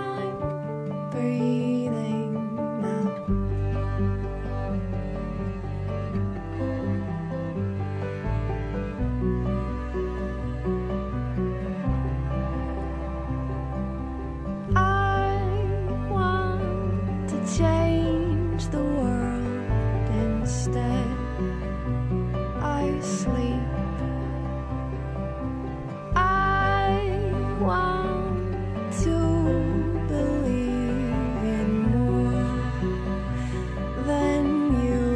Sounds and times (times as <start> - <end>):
Music: 0.0 - 35.1.